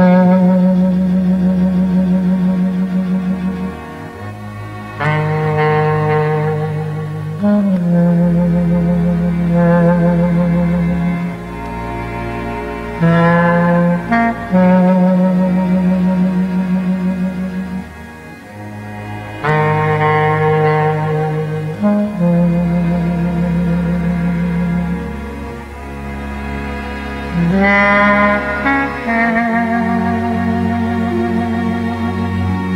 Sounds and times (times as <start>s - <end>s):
Clarinet: 0.0s - 32.7s.